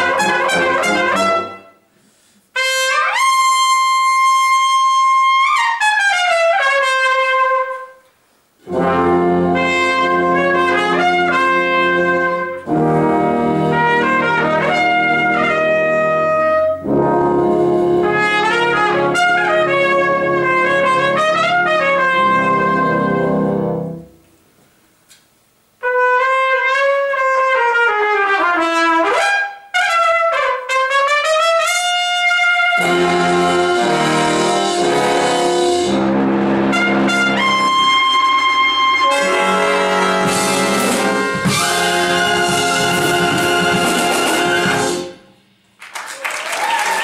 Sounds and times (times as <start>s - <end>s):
Classical music: 0.0s - 1.8s, 8.6s - 24.2s, 32.6s - 45.3s
Clarinet: 0.0s - 1.9s, 2.6s - 24.3s, 25.8s - 45.4s
Orchestra: 0.0s - 1.9s, 8.6s - 24.3s, 25.8s - 45.4s
Trumpet: 0.0s - 24.3s, 25.6s - 45.5s
Inside, large room or hall: 0.0s - 47.0s.